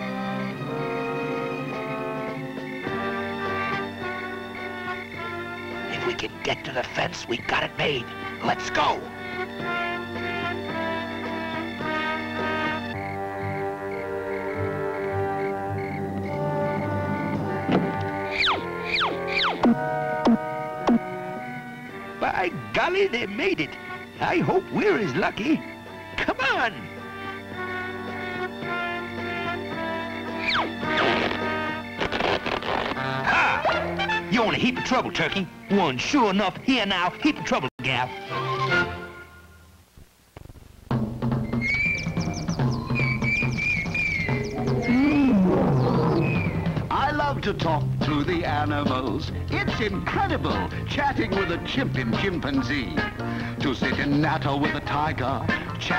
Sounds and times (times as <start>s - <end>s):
Music: 0.0s - 39.8s, 40.9s - 55.9s
Speech: 5.9s - 9.1s, 22.2s - 25.6s, 26.2s - 26.9s, 34.3s - 38.2s, 46.9s - 55.9s.